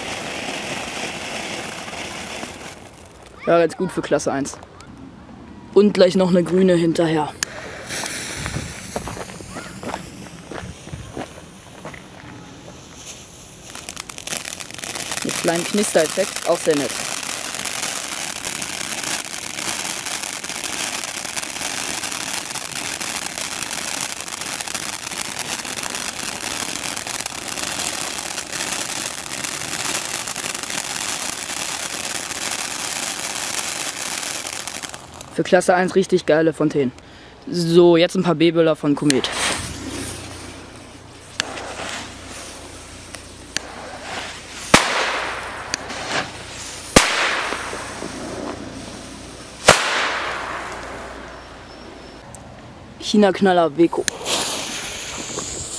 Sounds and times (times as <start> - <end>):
Speech: 3.4 - 4.6, 5.8 - 7.4, 15.2 - 17.0, 35.4 - 36.9, 37.5 - 39.3, 53.0 - 54.2.